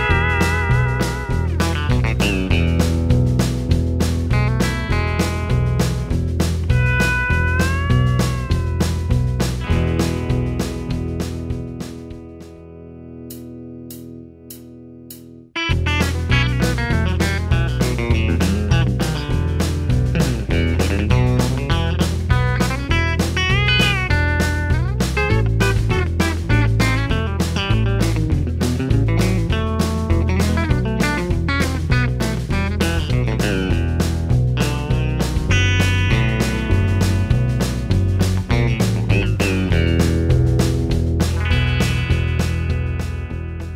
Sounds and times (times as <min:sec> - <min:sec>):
Acoustic guitar: 0:00.0 - 0:14.0, 0:15.6 - 0:43.7
Bass guitar: 0:00.0 - 0:43.7
Electric guitar: 0:00.0 - 0:43.7
Strum: 0:00.0 - 0:43.7.